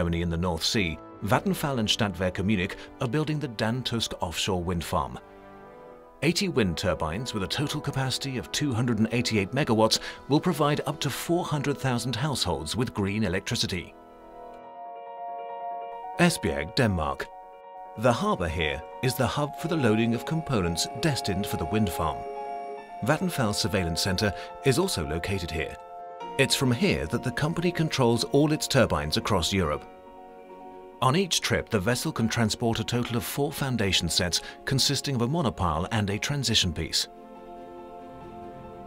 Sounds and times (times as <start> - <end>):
Speech: 0.0 - 5.2, 6.2 - 14.0, 16.2 - 17.3, 18.0 - 22.2, 23.0 - 25.8, 26.4 - 29.9, 31.0 - 37.1
Music: 0.0 - 38.8.